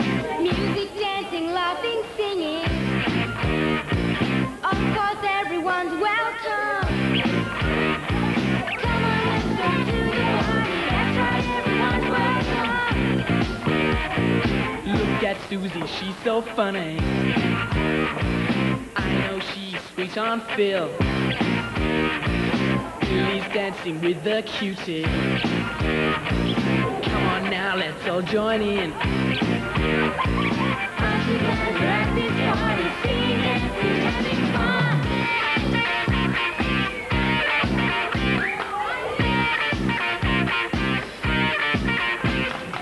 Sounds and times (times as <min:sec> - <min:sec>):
Music: 0:00.0 - 0:42.8
Female singing: 0:00.3 - 0:02.8, 0:04.6 - 0:06.9, 0:08.8 - 0:13.2, 0:31.0 - 0:35.4
Male singing: 0:19.0 - 0:21.0, 0:23.0 - 0:25.2, 0:27.0 - 0:29.0, 0:31.0 - 0:35.0.